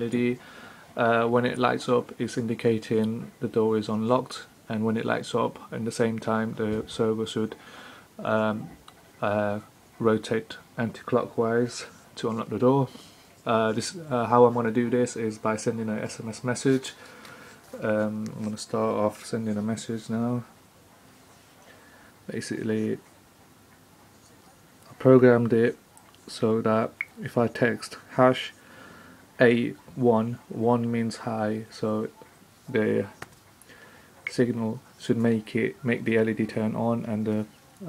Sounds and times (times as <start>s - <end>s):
Speech: 0.0s - 0.4s, 1.0s - 7.6s, 8.2s - 17.0s, 17.8s - 20.5s, 22.3s - 23.0s, 24.8s - 28.6s, 29.4s - 33.2s, 34.3s - 37.8s.